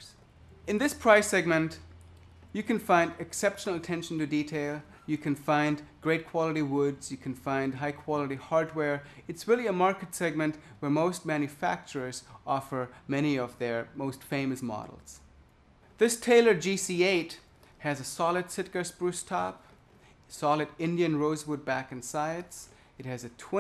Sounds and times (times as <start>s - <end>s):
Speech: 0.0s - 1.9s, 2.5s - 15.3s, 16.0s - 19.7s, 20.3s - 23.6s.